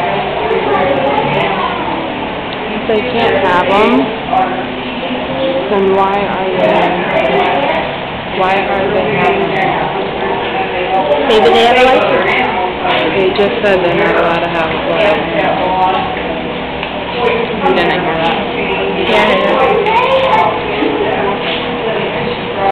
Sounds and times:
Speech: 0:00.0 - 0:16.5, 0:17.1 - 0:22.7.

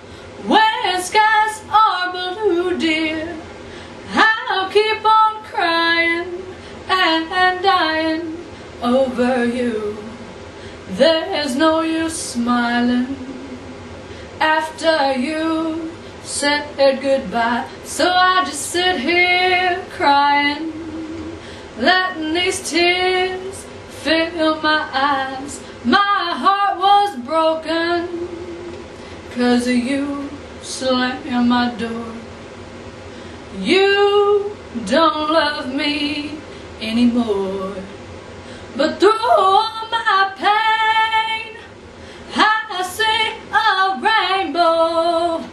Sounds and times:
Female singing: 0:00.4 - 0:03.5, 0:04.1 - 0:10.3, 0:10.9 - 0:13.6, 0:14.4 - 0:32.3, 0:33.6 - 0:37.9, 0:38.8 - 0:41.7, 0:42.3 - 0:45.5.

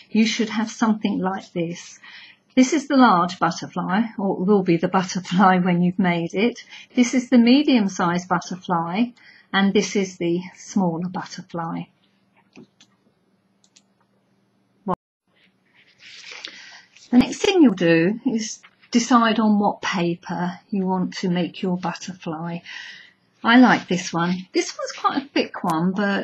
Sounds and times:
Speech: 0:00.0 - 0:11.9, 0:17.1 - 0:22.7, 0:23.4 - 0:26.2
Inside, small room: 0:00.0 - 0:26.2.

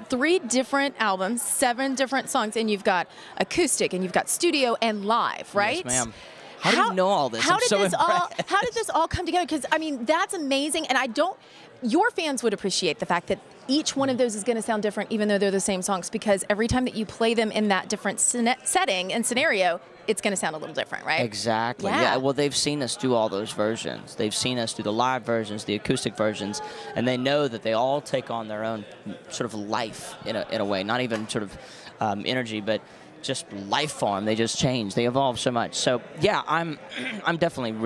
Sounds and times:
Speech: 0:05.5 - 0:09.3, 0:21.4 - 0:29.4.

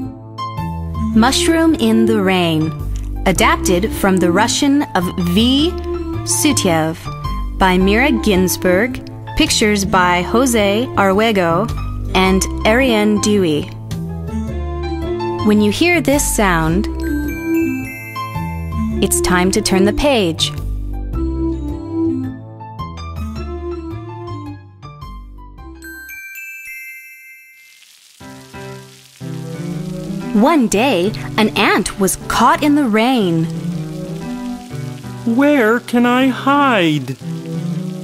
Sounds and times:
Music: 0:00.0 - 0:38.0
Speech: 0:01.2 - 0:02.7, 0:03.3 - 0:07.0, 0:07.6 - 0:13.7, 0:15.4 - 0:16.9, 0:19.0 - 0:20.6, 0:30.4 - 0:33.5, 0:35.3 - 0:37.2
Rain on surface: 0:02.5 - 0:10.9, 0:16.2 - 0:19.7, 0:25.8 - 0:38.0.

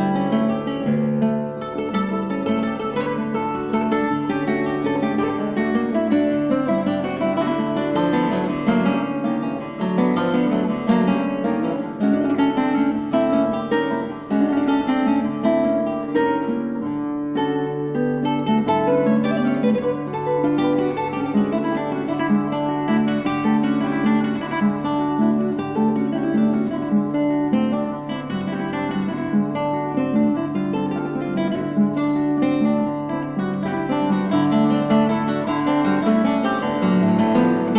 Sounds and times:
Acoustic guitar: 0:00.0 - 0:37.7.

